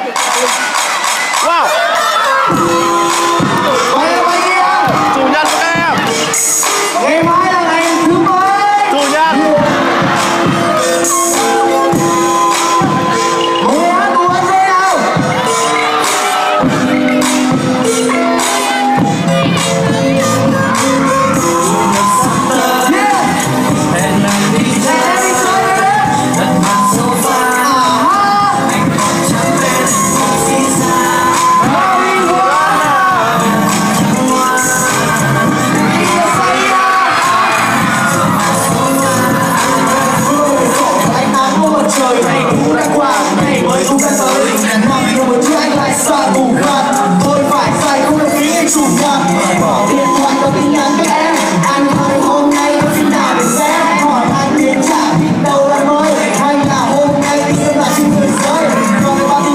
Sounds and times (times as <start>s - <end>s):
Music: 0.0s - 59.5s.